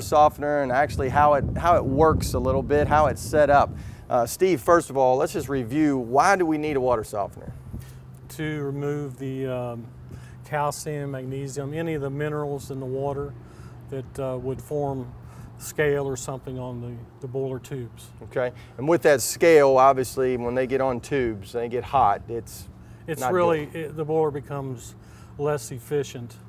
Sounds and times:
Speech: 0.0s - 7.5s, 8.3s - 9.9s, 10.5s - 13.3s, 13.9s - 26.4s.

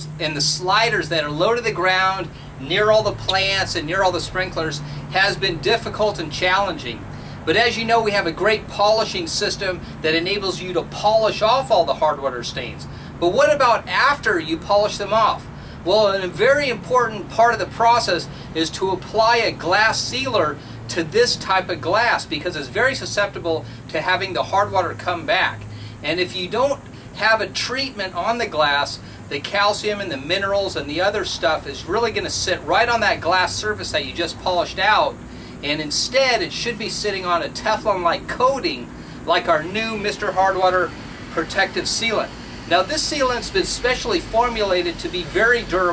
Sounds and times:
Speech: 0.0s - 45.9s.

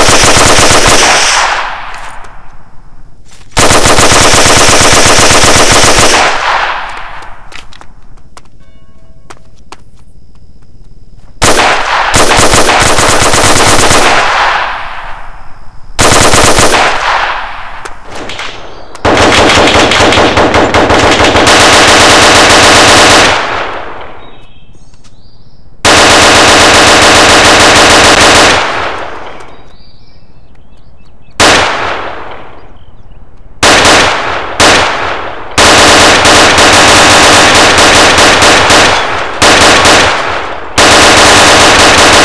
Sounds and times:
Machine gun: 0.0s - 1.7s, 3.6s - 6.9s, 11.4s - 14.6s, 16.0s - 17.4s, 18.2s - 23.8s, 25.9s - 29.2s, 33.6s - 42.2s.

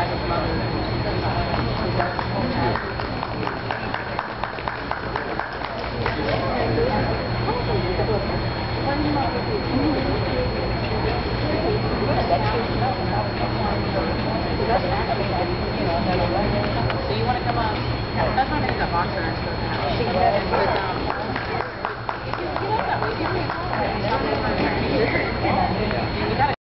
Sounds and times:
Speech: 0.0s - 26.6s.

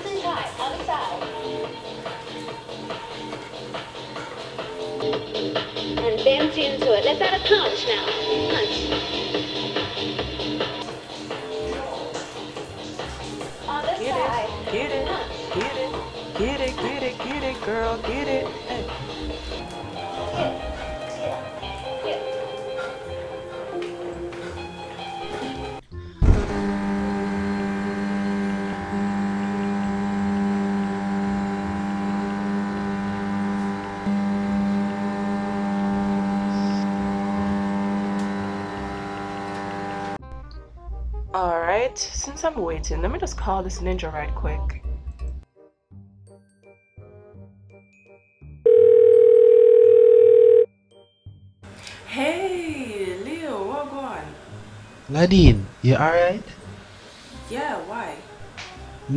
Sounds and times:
Music: 0.0s - 26.6s, 36.5s - 37.6s, 38.3s - 59.1s
Speech: 41.4s - 44.8s, 55.1s - 56.5s.

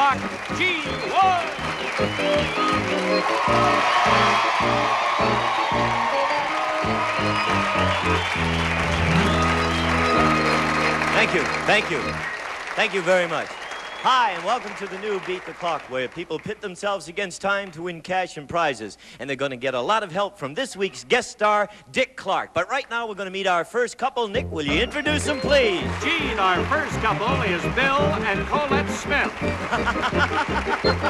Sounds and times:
Music: 0.0s - 12.6s, 24.4s - 31.1s
Speech: 12.8s - 29.3s.

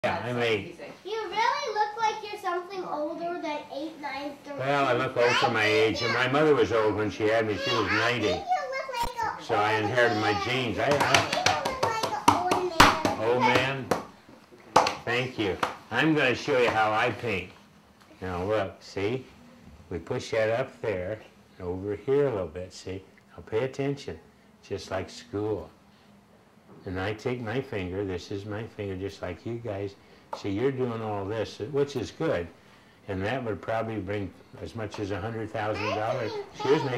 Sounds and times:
Child speech, kid speaking: 0.9s - 13.9s, 35.6s - 36.9s.

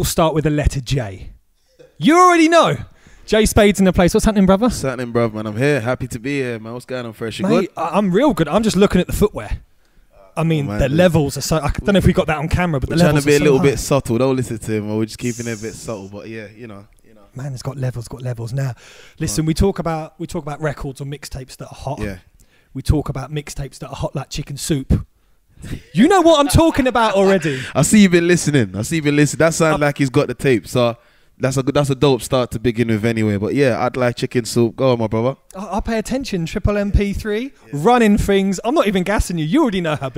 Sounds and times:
Speech: 0.0s - 1.4s, 2.0s - 9.6s, 10.2s - 22.2s, 22.8s - 25.1s, 25.9s - 40.1s.

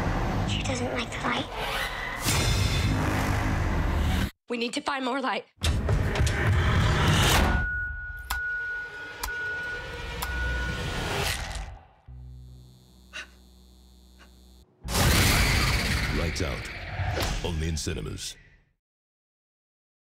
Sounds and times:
Speech: 16.1s - 16.7s, 17.4s - 18.4s.

